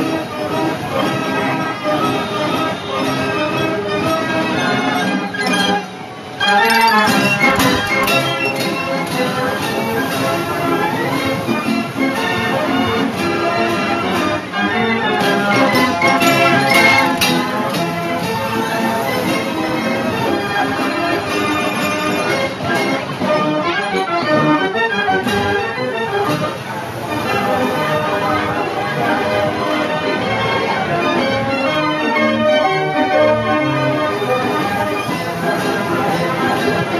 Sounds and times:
Jazz: 0.0s - 36.9s.

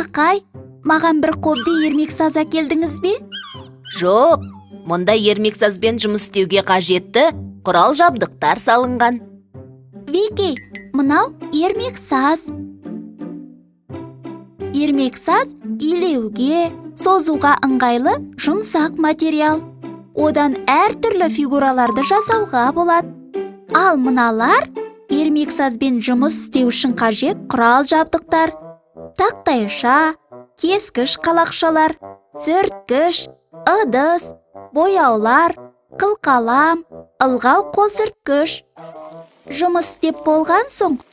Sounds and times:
Speech: 0.0s - 3.2s, 3.9s - 9.2s, 10.1s - 12.5s, 14.7s - 19.6s, 20.2s - 23.0s, 23.7s - 28.6s, 29.2s - 41.1s
Music for children: 0.0s - 38.2s, 38.8s - 41.1s.

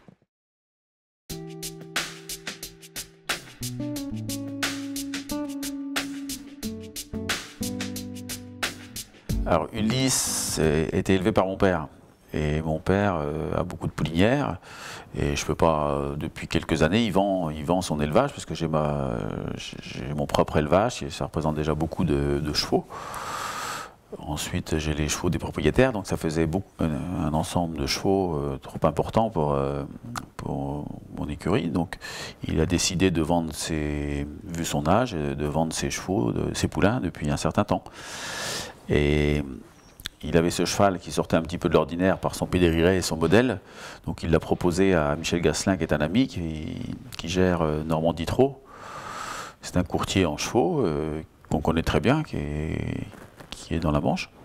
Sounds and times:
Speech: 9.4s - 22.9s, 24.1s - 37.9s, 38.9s - 48.6s, 49.6s - 54.4s.

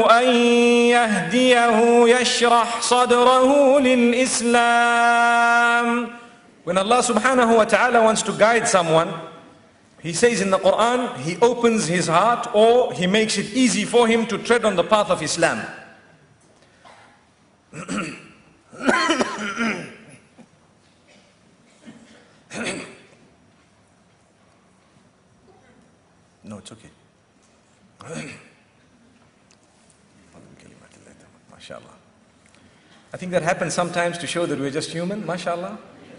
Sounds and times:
Speech: 26.4s - 27.0s, 33.2s - 35.9s.

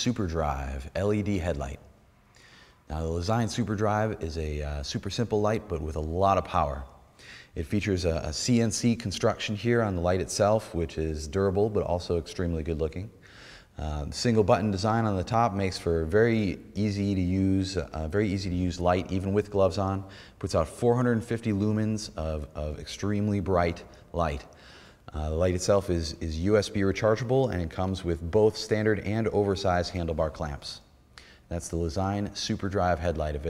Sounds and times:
Speech: 0.0s - 1.9s, 2.9s - 7.0s, 7.6s - 13.2s, 13.8s - 24.5s, 25.1s - 30.9s, 31.5s - 33.4s.

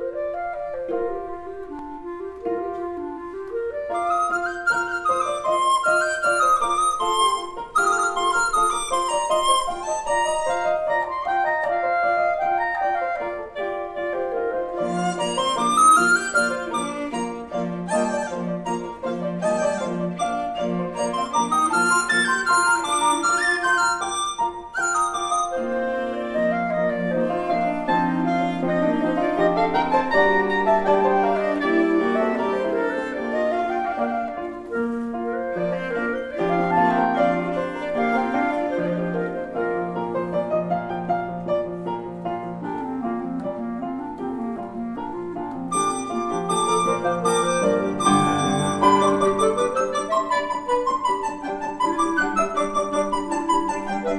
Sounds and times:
Cello: 0.0s - 54.1s.

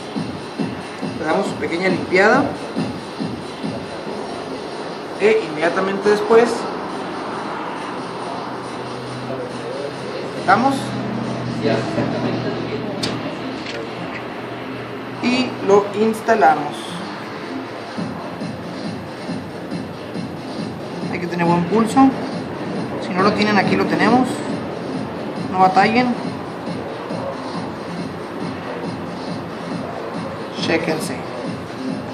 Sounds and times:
Music: 0.0s - 32.1s.

